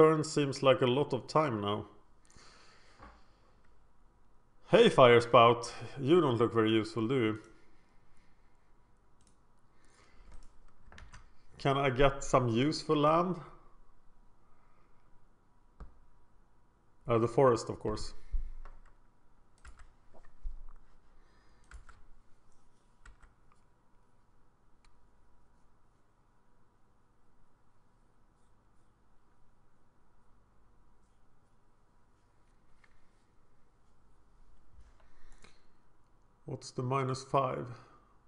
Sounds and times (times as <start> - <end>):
Speech: 0.0 - 2.0, 4.7 - 7.5, 11.6 - 13.6, 17.1 - 18.2, 36.5 - 38.0.